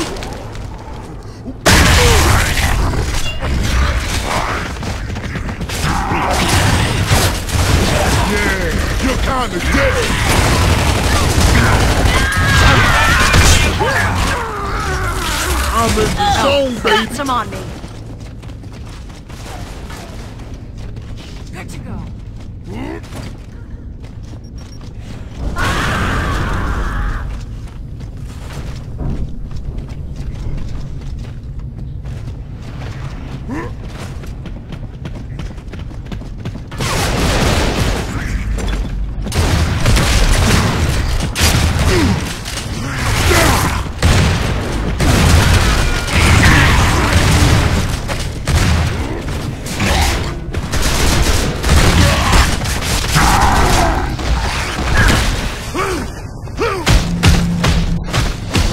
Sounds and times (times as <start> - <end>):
Speech: 21.5 - 22.1.